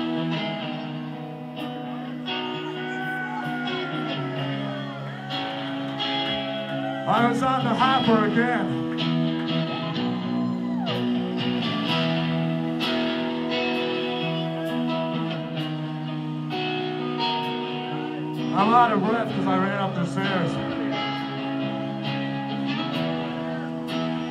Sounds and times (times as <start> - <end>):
Music: 0.0 - 24.3.